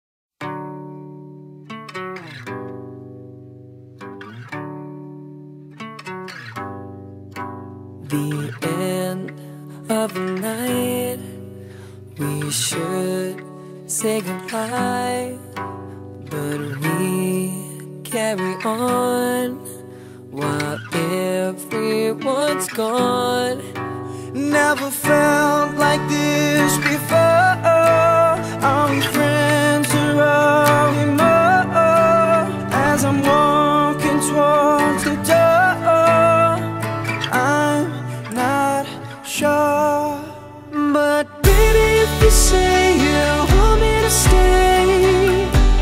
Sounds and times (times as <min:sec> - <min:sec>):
Music: 0:00.4 - 0:45.8.